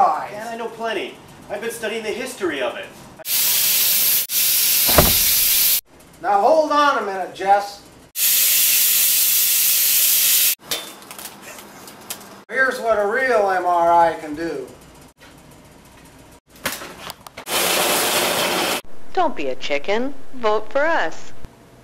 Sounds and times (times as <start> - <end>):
Speech: 0.0 - 3.0, 6.2 - 7.9, 12.5 - 14.8, 19.2 - 21.4.